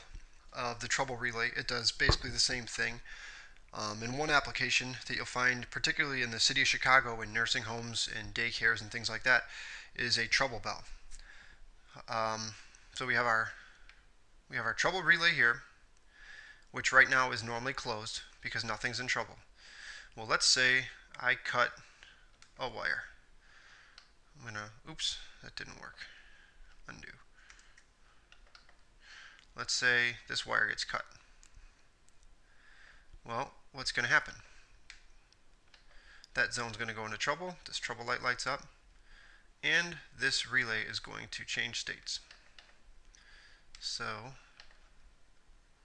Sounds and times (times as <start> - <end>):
Speech: 0.0 - 3.1, 3.7 - 11.0, 11.9 - 13.6, 14.5 - 15.8, 16.7 - 19.5, 20.2 - 21.9, 22.6 - 23.2, 24.4 - 26.2, 26.9 - 27.3, 29.6 - 31.2, 33.2 - 34.5, 36.4 - 38.8, 39.6 - 42.3, 43.8 - 44.5.